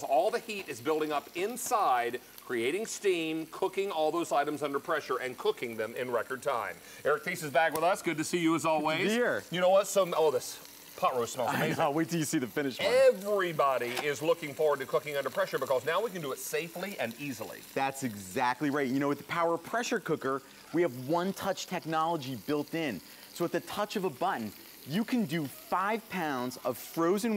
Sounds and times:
Speech: 0:00.0 - 0:27.3.

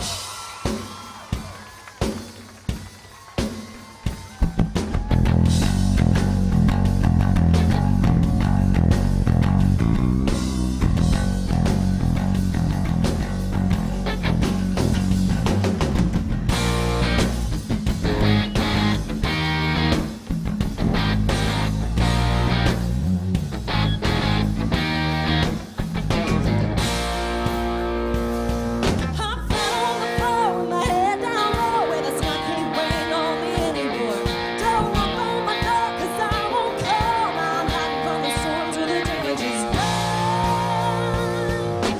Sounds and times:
Rhythm and blues: 0:00.0 - 0:41.9.

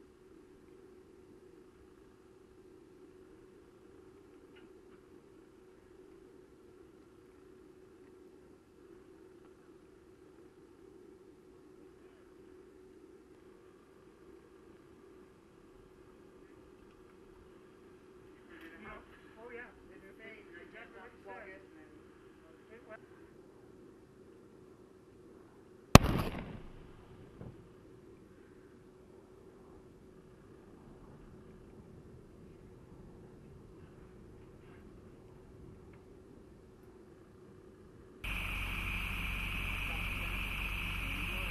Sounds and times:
Outside, rural or natural: 0:00.0 - 0:41.5
Silence: 0:26.0 - 0:27.4.

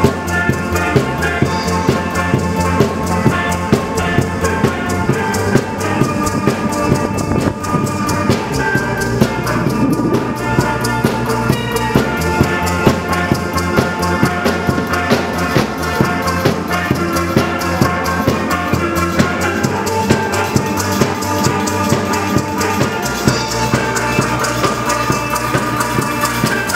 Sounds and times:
Drum: 0:00.0 - 0:26.7.

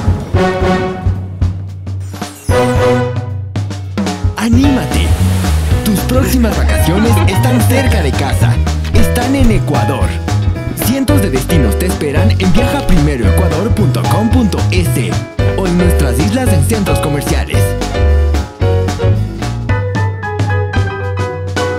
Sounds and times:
Music: 0:00.0 - 0:21.7
Speech: 0:04.4 - 0:05.2, 0:05.8 - 0:10.2, 0:10.8 - 0:17.8.

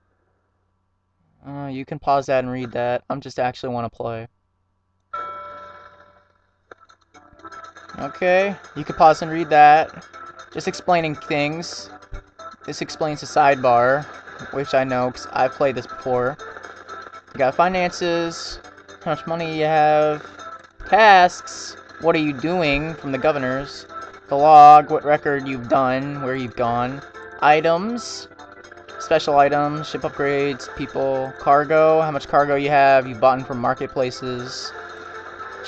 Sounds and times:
Speech: 0:01.4 - 0:04.3, 0:08.0 - 0:10.0, 0:10.6 - 0:11.9, 0:12.7 - 0:16.4, 0:17.4 - 0:20.2, 0:20.9 - 0:28.3, 0:29.0 - 0:34.7
Music: 0:05.2 - 0:35.6.

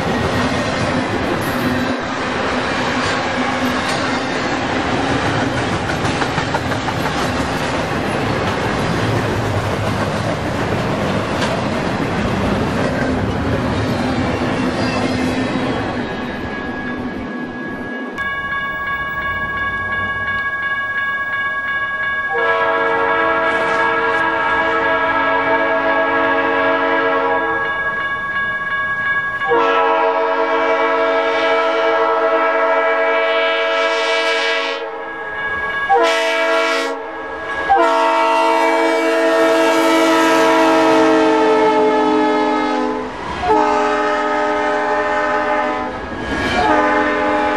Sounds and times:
Railroad car, train wagon: 0:00.0 - 0:47.5
Train horn: 0:22.3 - 0:27.7, 0:29.4 - 0:35.1, 0:35.9 - 0:47.5.

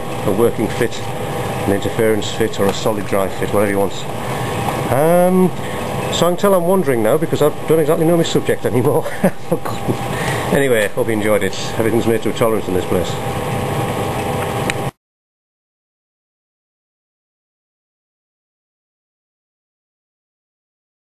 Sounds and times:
Speech: 0:00.2 - 0:01.1, 0:01.7 - 0:04.1, 0:04.9 - 0:09.8, 0:10.5 - 0:13.2.

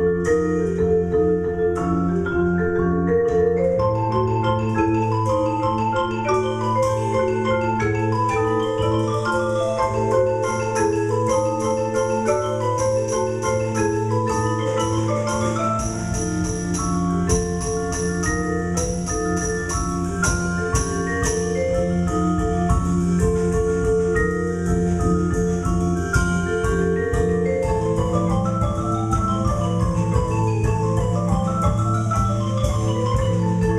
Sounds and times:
Vibraphone: 0:00.0 - 0:33.7.

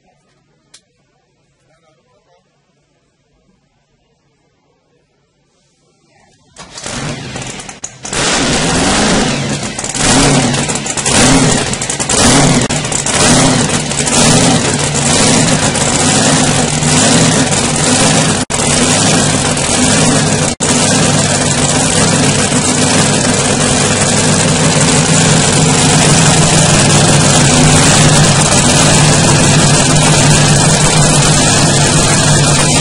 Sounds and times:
Speech: 0:00.0 - 0:06.6
Vehicle: 0:05.3 - 0:32.8.

